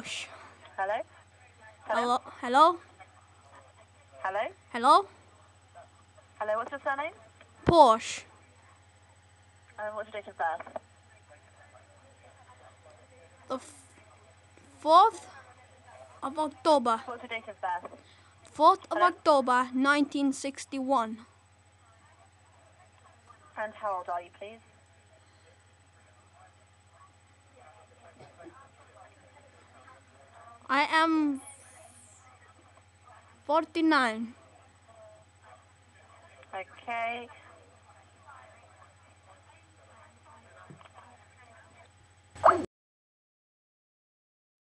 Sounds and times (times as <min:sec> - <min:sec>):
Speech: 0:00.0 - 0:42.0.